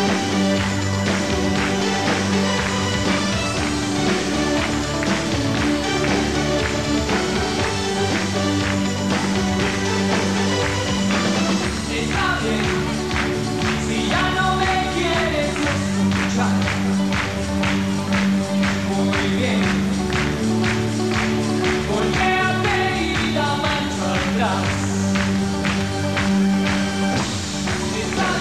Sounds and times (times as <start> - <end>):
Music: 0.0 - 28.4.